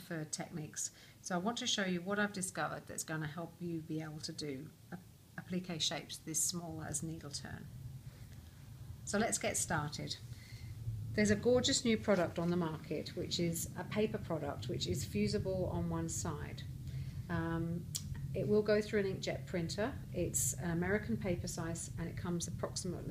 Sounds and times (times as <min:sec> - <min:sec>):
Speech: 0:00.0 - 0:07.7, 0:09.1 - 0:10.2, 0:11.2 - 0:16.7, 0:17.3 - 0:23.1.